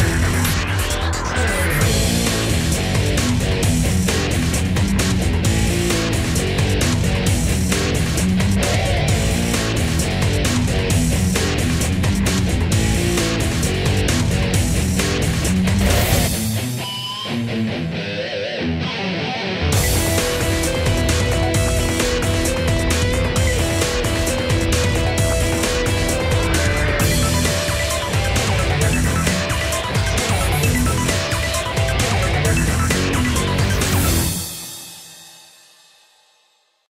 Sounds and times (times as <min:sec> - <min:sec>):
Music: 0:00.0 - 0:36.9.